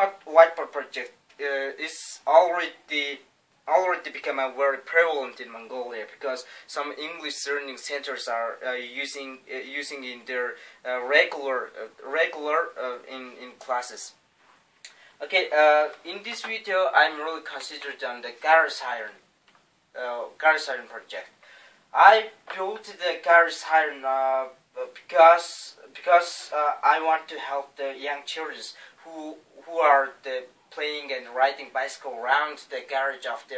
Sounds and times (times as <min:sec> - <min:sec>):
Speech: 0:00.0 - 0:14.2, 0:15.2 - 0:19.2, 0:19.9 - 0:33.5.